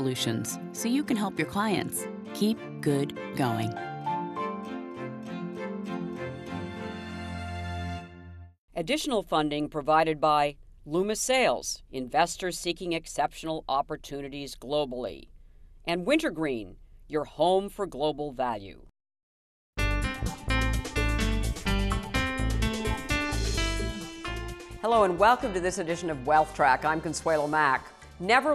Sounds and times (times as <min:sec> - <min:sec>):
Speech: 0:00.0 - 0:03.8, 0:08.8 - 0:15.3, 0:15.9 - 0:18.9, 0:24.8 - 0:28.5.